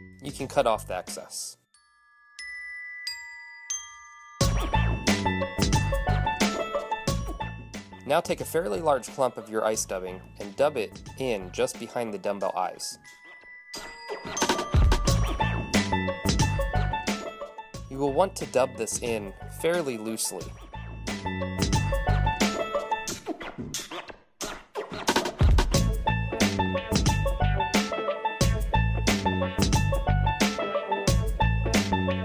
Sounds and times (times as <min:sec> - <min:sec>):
Glockenspiel: 0:00.0 - 0:10.6, 0:11.2 - 0:22.9
Chime: 0:01.6 - 0:07.4, 0:12.6 - 0:17.9
Marimba, xylophone: 0:01.7 - 0:07.5, 0:12.9 - 0:22.8.